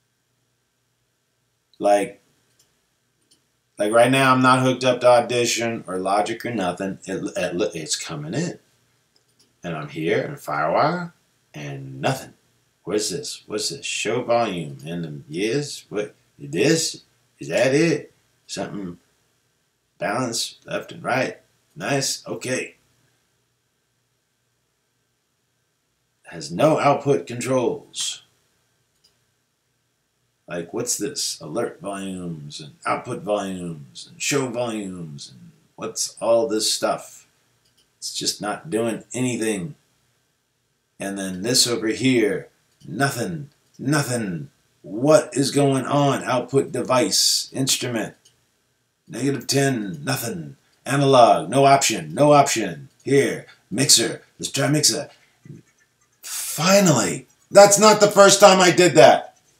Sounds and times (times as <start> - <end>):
Speech: 1.8 - 2.2, 3.8 - 8.6, 9.6 - 19.0, 20.0 - 22.8, 26.3 - 28.3, 30.5 - 37.2, 38.0 - 39.8, 41.0 - 48.2, 49.1 - 55.6, 56.2 - 59.3.